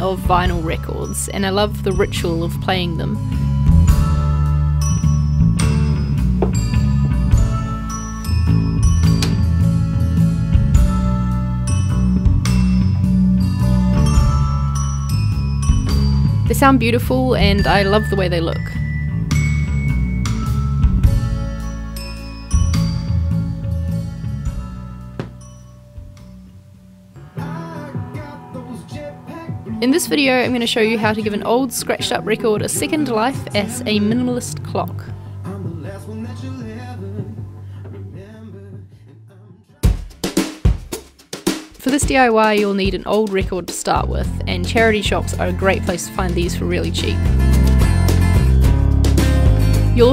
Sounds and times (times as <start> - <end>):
Speech: 0.0 - 3.2, 16.5 - 18.8, 29.8 - 35.1, 41.8 - 47.2
Music: 0.0 - 50.1.